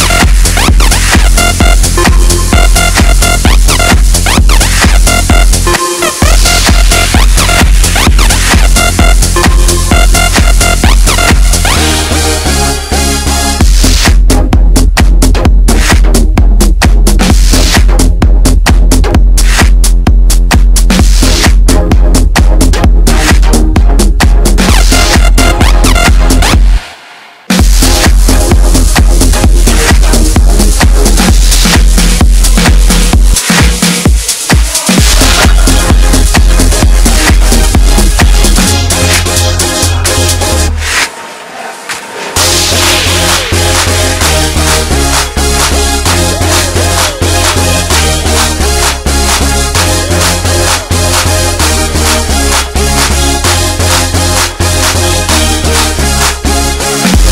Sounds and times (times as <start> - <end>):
Music: 0.0 - 57.3.